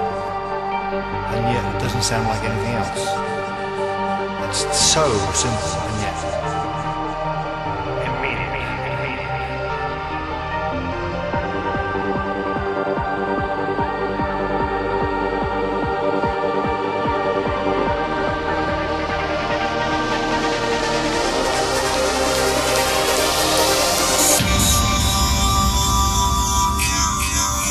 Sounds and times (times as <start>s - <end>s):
Music: 0.0s - 27.7s.